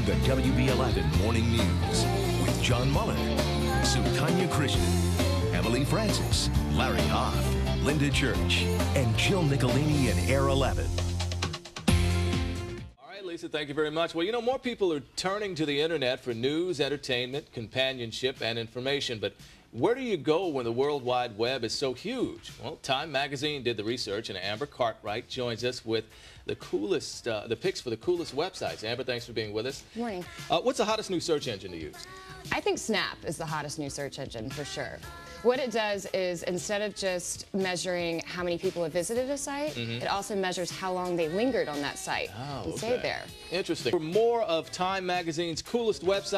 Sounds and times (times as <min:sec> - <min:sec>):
Music: 0:00.0 - 0:46.3
Speech: 0:13.0 - 0:31.9, 0:41.2 - 0:46.3.